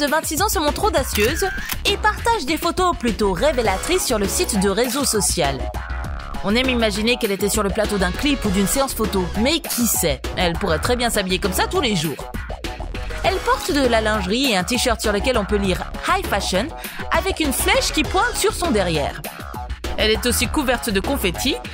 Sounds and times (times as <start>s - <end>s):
Speech: 0.0s - 5.7s, 6.4s - 12.3s, 13.2s - 19.2s, 20.0s - 21.6s
Music: 0.0s - 21.7s.